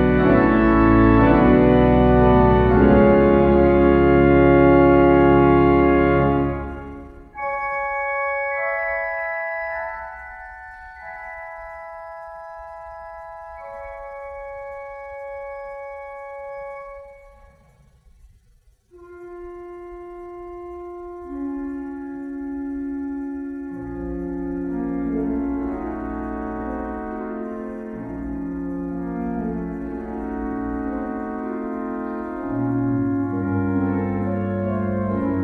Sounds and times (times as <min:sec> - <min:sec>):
Music: 0:00.0 - 0:35.4.